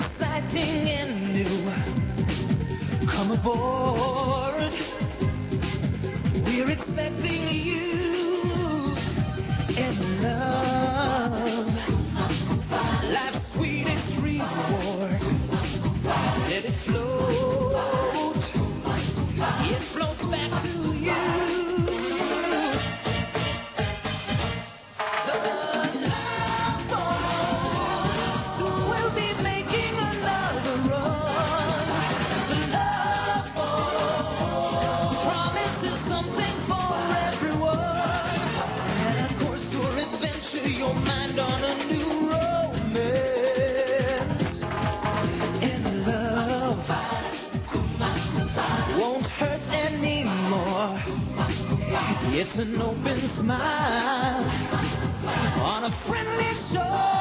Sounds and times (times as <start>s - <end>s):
Music: 0.0s - 57.2s.